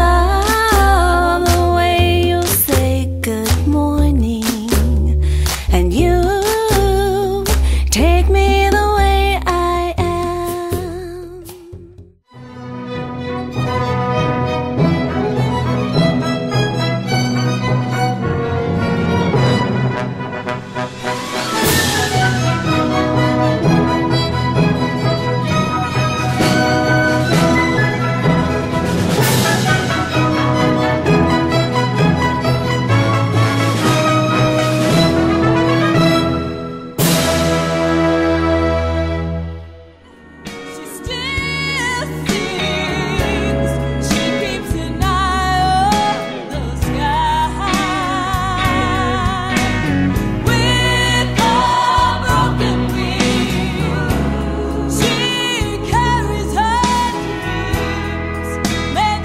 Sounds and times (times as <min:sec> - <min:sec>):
Tender music: 0:00.0 - 0:59.2.